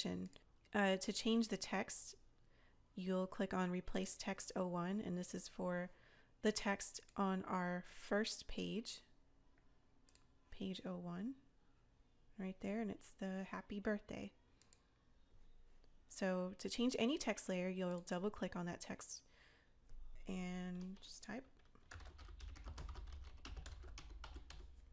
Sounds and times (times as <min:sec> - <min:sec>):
Computer keyboard: 0:20.7 - 0:24.9.